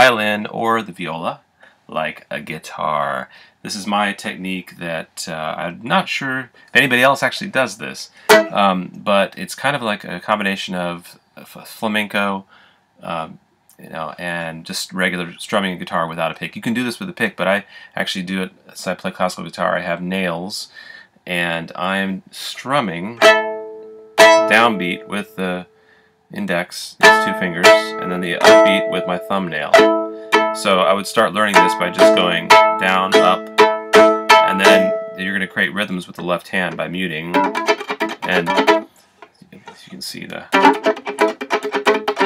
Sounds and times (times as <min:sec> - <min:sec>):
Pizzicato: 0:08.3 - 0:08.7, 0:27.0 - 0:35.2, 0:37.3 - 0:38.9, 0:39.5 - 0:42.2.